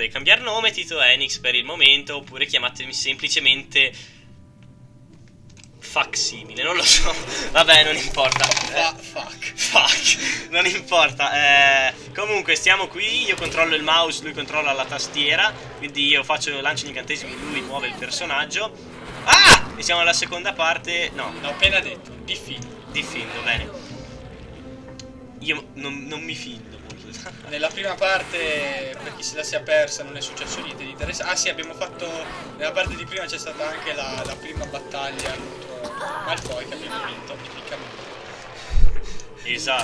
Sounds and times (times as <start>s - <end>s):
Music: 0.0s - 39.8s
Speech: 25.4s - 37.8s.